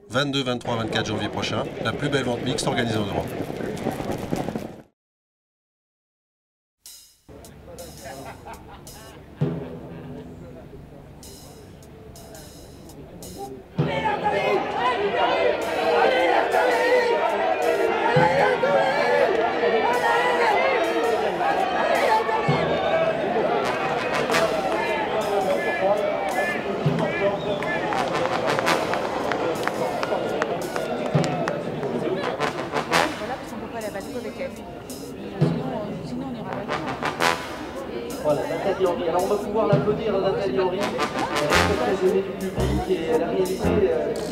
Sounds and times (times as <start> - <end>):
Speech: 0.0 - 3.4, 10.2 - 17.2, 24.2 - 32.4, 33.1 - 37.0, 37.8 - 44.3
Music: 6.9 - 44.3.